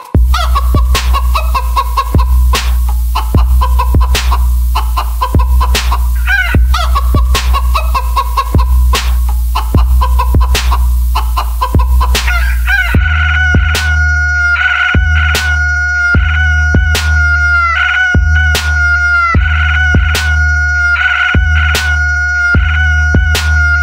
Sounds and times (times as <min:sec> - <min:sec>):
Music: 0:00.0 - 0:23.8.